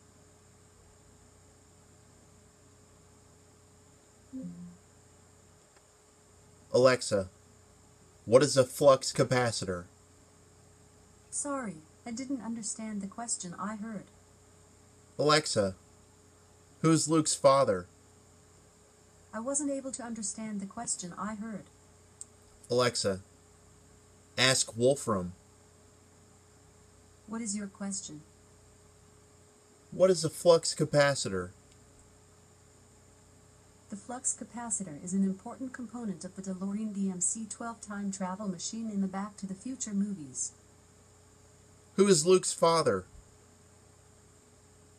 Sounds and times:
Speech: 4.4s - 4.8s, 6.8s - 7.3s, 8.3s - 9.9s, 11.4s - 14.1s, 15.2s - 15.8s, 16.8s - 17.9s, 19.4s - 21.7s, 22.7s - 23.2s, 24.4s - 25.4s, 27.3s - 28.2s, 30.0s - 31.5s, 33.9s - 40.5s, 42.0s - 43.0s.

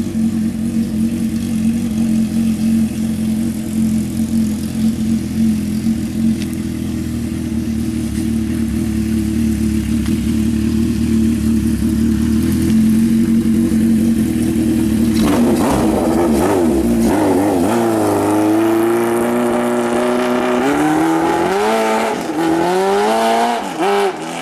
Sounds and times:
Vehicle: 0.0s - 24.4s.

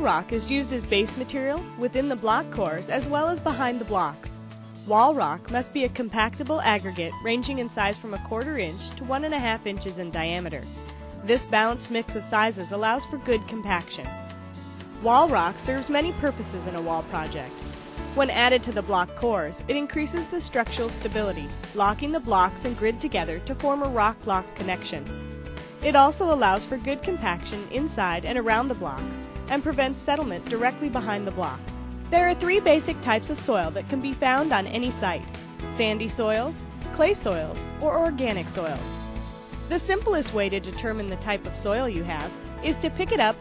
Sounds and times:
Speech: 0.0s - 4.3s, 4.9s - 10.6s, 11.2s - 14.1s, 15.0s - 17.5s, 18.2s - 25.1s, 25.8s - 38.8s, 39.7s - 43.4s
Music: 0.0s - 43.4s.

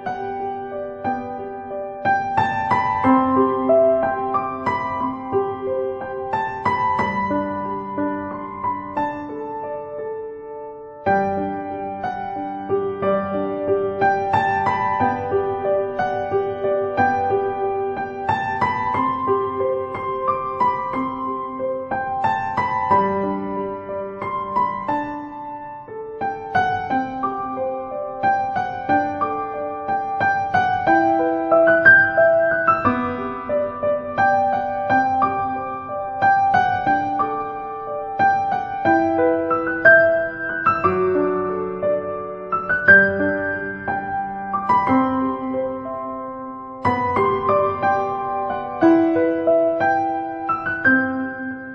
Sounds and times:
Music: 0.0s - 51.7s.

